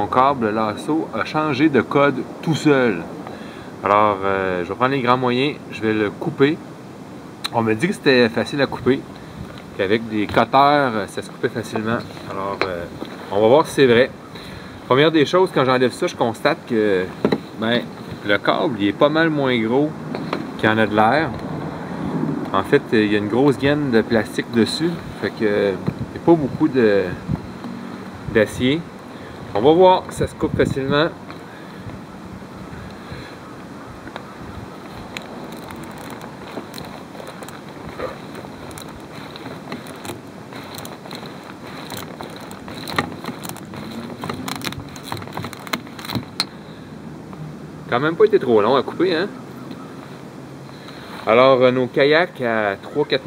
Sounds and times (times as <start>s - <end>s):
Speech: 0.0s - 3.1s, 3.8s - 6.6s, 7.5s - 9.1s, 9.8s - 14.2s, 14.9s - 20.0s, 20.6s - 21.4s, 22.5s - 27.3s, 28.3s - 28.9s, 29.6s - 31.2s, 47.9s - 49.4s, 51.3s - 53.2s.